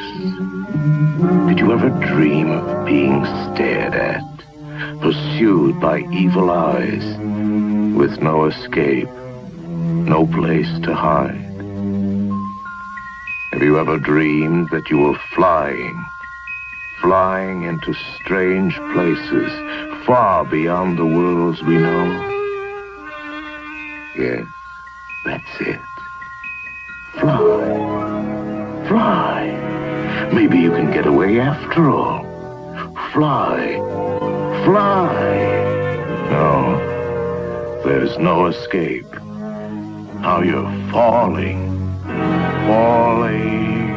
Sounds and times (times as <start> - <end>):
Music: 0.0 - 43.9
Narration, monologue: 1.3 - 43.9.